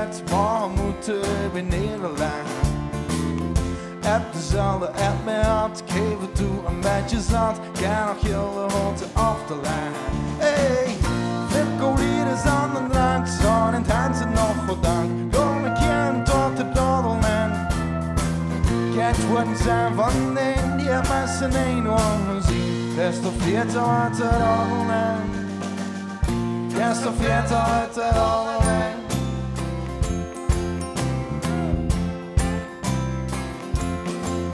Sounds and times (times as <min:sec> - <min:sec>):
Music: 0:00.0 - 0:34.5.